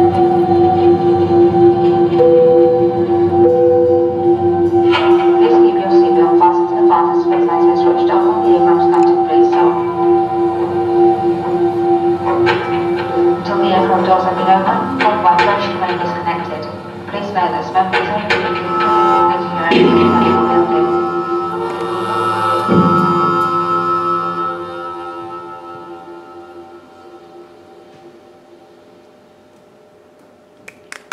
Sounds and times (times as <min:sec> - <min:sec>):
Musical instrument: 0:00.0 - 0:29.0
Inside, large room or hall: 0:00.0 - 0:31.1
Speech: 0:05.4 - 0:10.0, 0:13.4 - 0:18.6, 0:19.2 - 0:21.1.